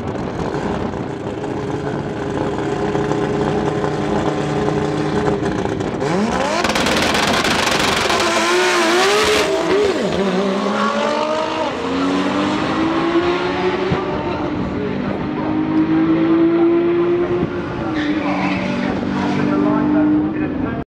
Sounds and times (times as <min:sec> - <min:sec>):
Speech: 0:14.3 - 0:20.9.